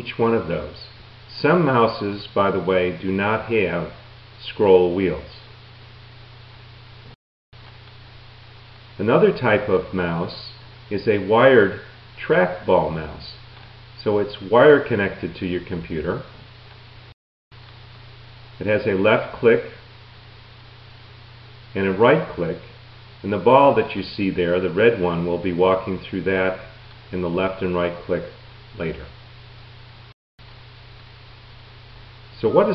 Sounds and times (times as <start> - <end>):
Speech: 0.0 - 5.5, 9.0 - 13.4, 14.0 - 16.3, 18.6 - 19.8, 21.8 - 29.2, 32.4 - 32.7.